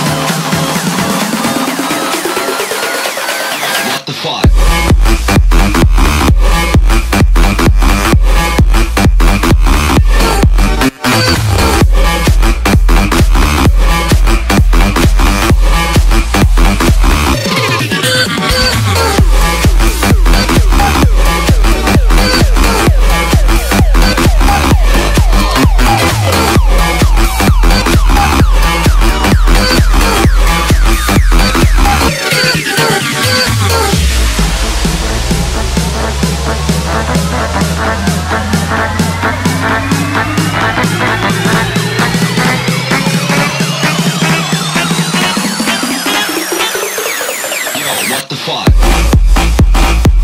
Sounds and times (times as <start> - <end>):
Electronic dance music: 0.0 - 50.2
House music: 0.0 - 50.2.